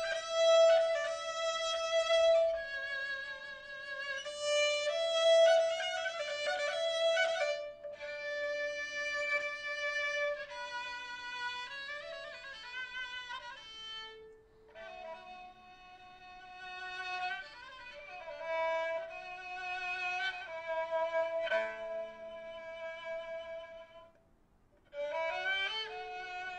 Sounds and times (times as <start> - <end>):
Classical music: 0.0 - 16.0, 16.6 - 24.2, 24.9 - 26.5
Bowed string instrument: 0.0 - 26.5.